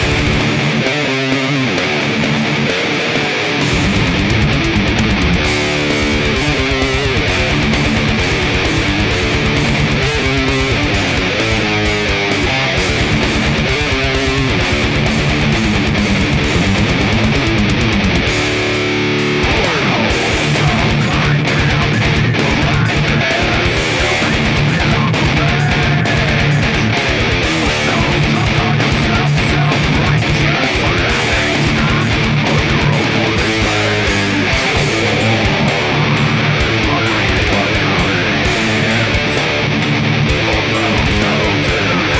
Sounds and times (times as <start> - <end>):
Strum: 1.6 - 42.1.